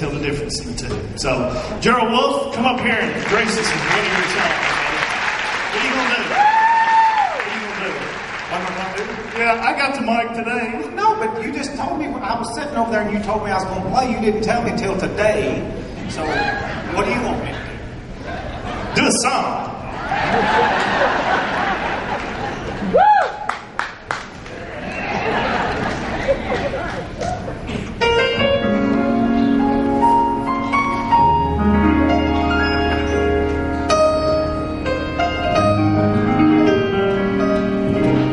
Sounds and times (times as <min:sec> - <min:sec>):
Male speech, man speaking: 0:00.0 - 0:05.1, 0:05.7 - 0:06.4, 0:07.4 - 0:17.8, 0:19.0 - 0:19.8.